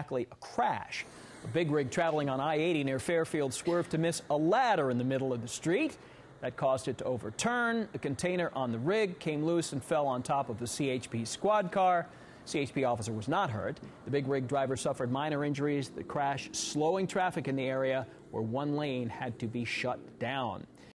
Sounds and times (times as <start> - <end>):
Speech: 0.0 - 20.7.